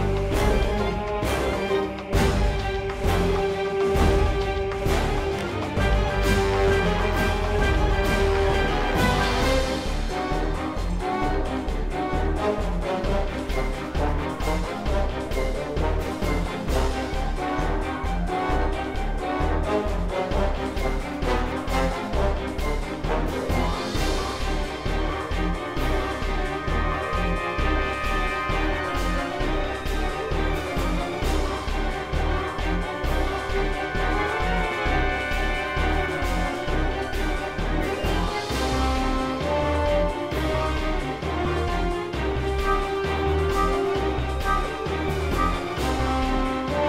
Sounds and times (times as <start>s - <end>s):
Music: 0.0s - 46.8s.